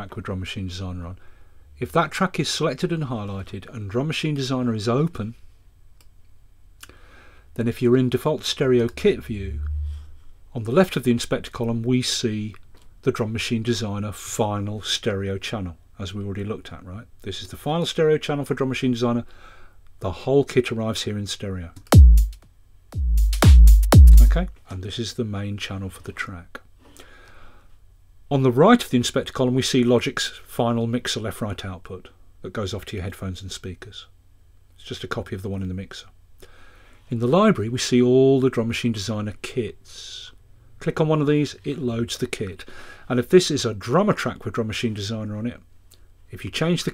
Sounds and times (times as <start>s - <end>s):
Speech: 0.0s - 1.2s, 1.8s - 5.4s, 7.6s - 9.9s, 10.5s - 19.3s, 20.0s - 21.8s, 24.1s - 26.7s, 28.3s - 34.2s, 34.8s - 36.2s, 37.1s - 45.7s, 46.3s - 46.9s.